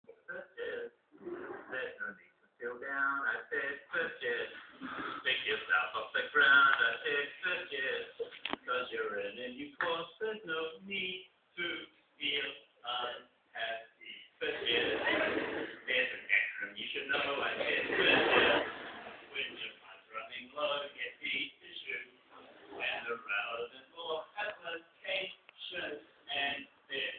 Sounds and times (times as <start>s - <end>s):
Speech: 0.0s - 27.1s.